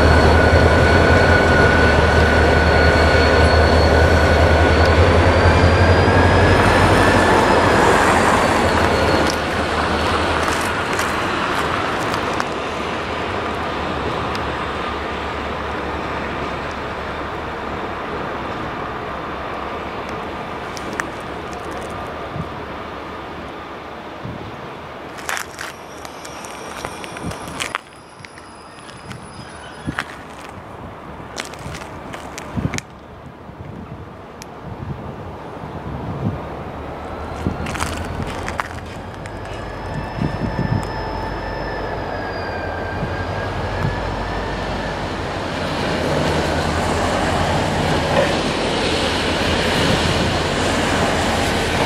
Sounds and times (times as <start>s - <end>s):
Train: 0.0s - 51.8s.